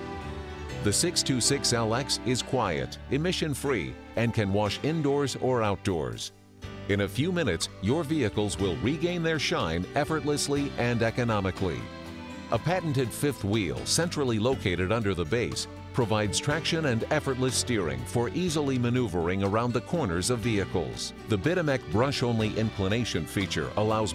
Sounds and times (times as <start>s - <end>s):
Music: 0.0s - 24.1s
Speech: 0.8s - 6.3s, 6.9s - 11.9s, 12.5s - 24.1s.